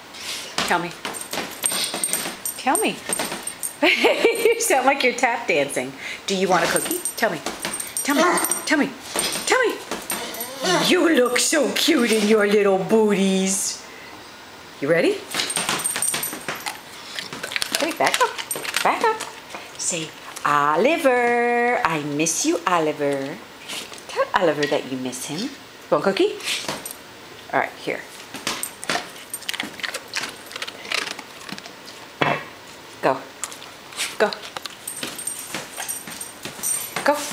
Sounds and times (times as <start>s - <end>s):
Speech: 0.6s - 1.0s, 4.6s - 13.8s, 14.8s - 15.3s, 17.8s - 19.2s, 19.8s - 23.4s, 24.1s - 26.4s, 27.5s - 28.1s, 33.0s - 33.3s, 37.0s - 37.3s.